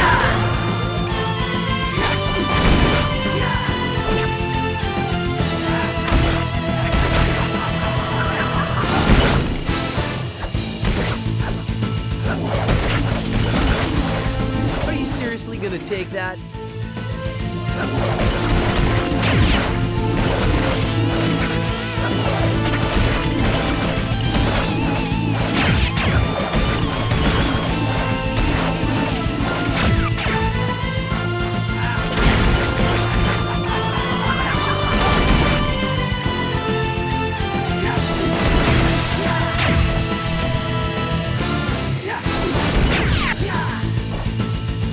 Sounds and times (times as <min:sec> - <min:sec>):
Music: 0:00.0 - 0:44.9.